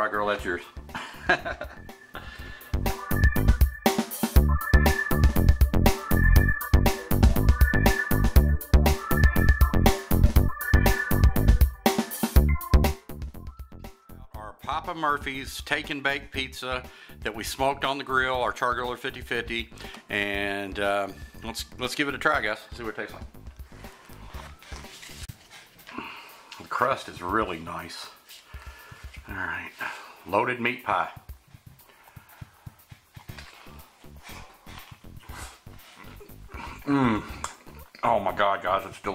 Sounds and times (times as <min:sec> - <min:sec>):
Speech: 0:00.0 - 0:00.8, 0:14.2 - 0:23.3, 0:26.6 - 0:28.2, 0:29.2 - 0:31.3, 0:38.0 - 0:39.1.